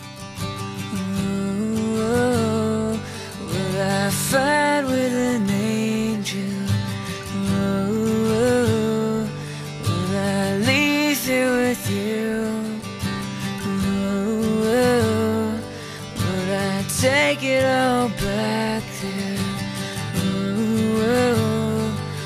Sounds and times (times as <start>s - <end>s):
Music: 0.0s - 22.2s.